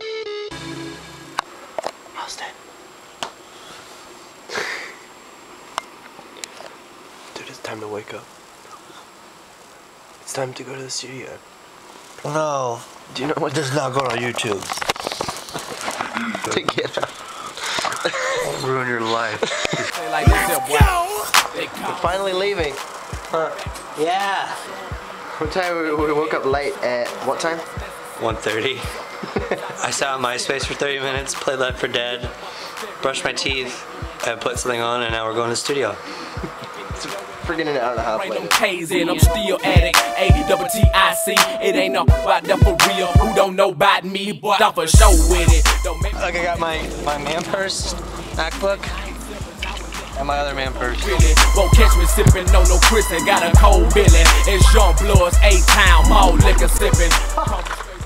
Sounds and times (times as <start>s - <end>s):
Music: 0.0s - 1.6s, 19.8s - 43.9s, 44.5s - 58.0s
Speech: 7.4s - 8.3s, 10.3s - 11.4s, 12.2s - 14.7s, 18.4s - 36.0s, 36.6s - 39.8s, 46.1s - 51.4s.